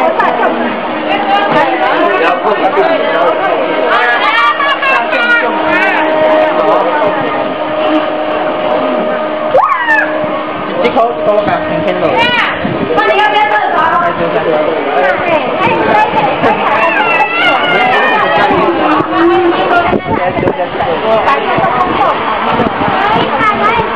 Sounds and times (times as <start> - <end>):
Motorboat, speedboat: 0.0 - 23.9.